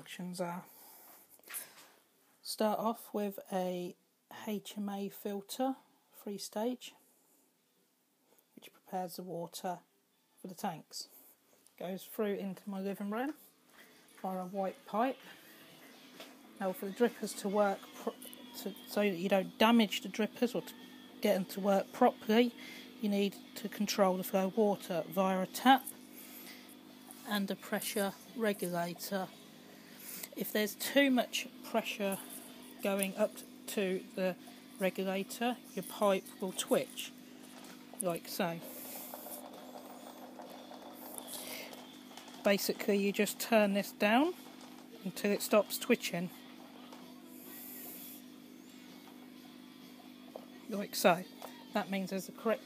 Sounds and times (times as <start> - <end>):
Speech: 0.0 - 0.7, 2.4 - 7.0, 8.6 - 11.1, 11.8 - 13.4, 14.2 - 15.4, 16.6 - 25.9, 27.2 - 29.3, 30.4 - 37.1, 38.0 - 38.7, 42.4 - 44.4, 45.0 - 46.3, 50.7 - 52.6.